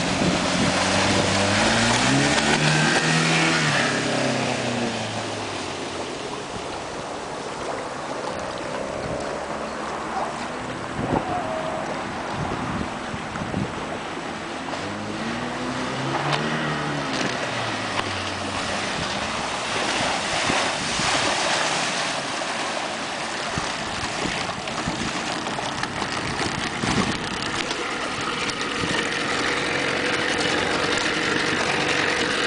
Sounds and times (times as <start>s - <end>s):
Motorboat, speedboat: 0.0s - 32.4s.